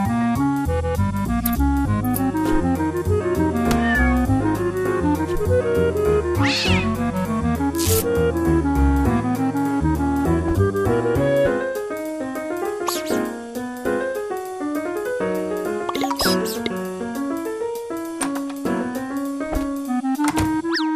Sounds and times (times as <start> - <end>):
Music: 0.0 - 20.9.